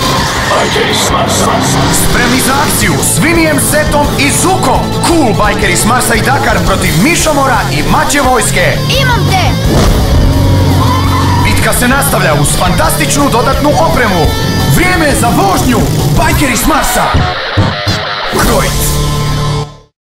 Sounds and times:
Music: 0:00.0 - 0:20.0
Speech: 0:11.5 - 0:17.2, 0:18.4 - 0:18.9.

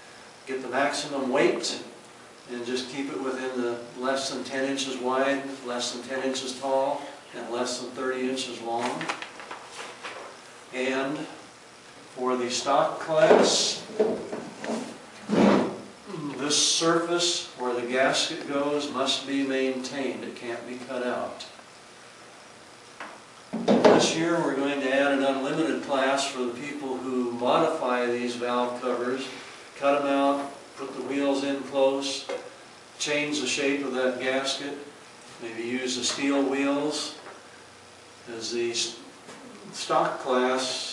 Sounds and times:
Speech: 0:00.4 - 0:09.1, 0:10.7 - 0:11.4, 0:12.2 - 0:13.9, 0:16.1 - 0:21.6, 0:23.9 - 0:32.4, 0:33.0 - 0:37.3, 0:38.2 - 0:40.9.

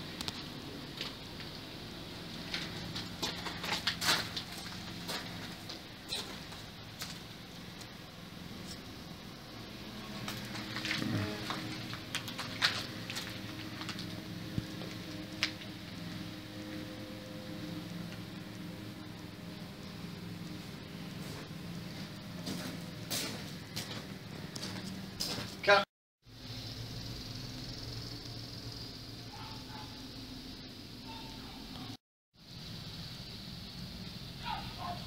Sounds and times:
Speech: 0:25.6 - 0:25.9.

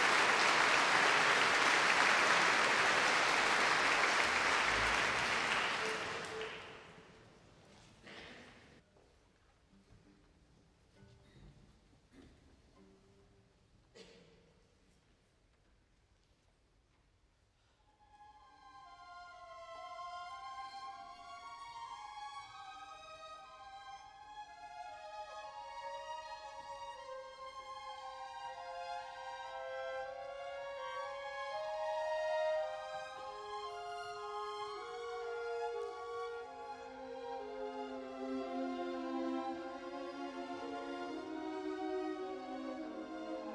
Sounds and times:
Orchestra: 0:00.0 - 0:07.8, 0:18.0 - 0:43.5
Violin, fiddle: 0:18.1 - 0:43.5.

